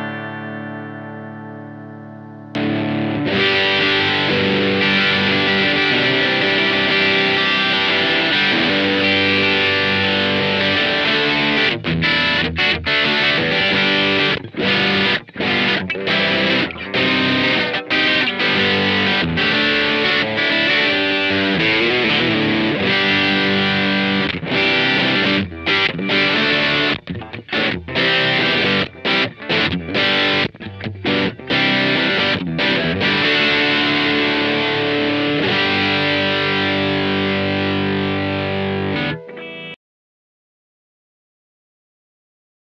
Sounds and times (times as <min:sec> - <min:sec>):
Music: 0:00.0 - 0:39.8.